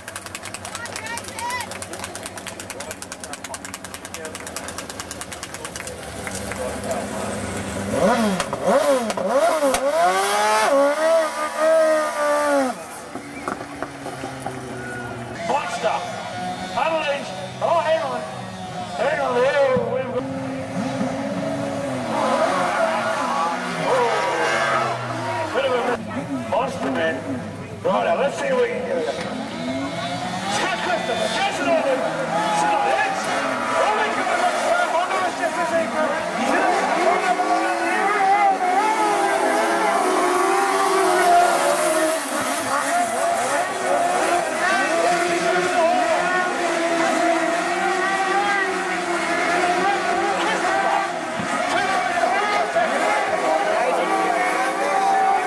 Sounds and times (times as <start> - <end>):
Race car, auto racing: 0.0 - 55.4.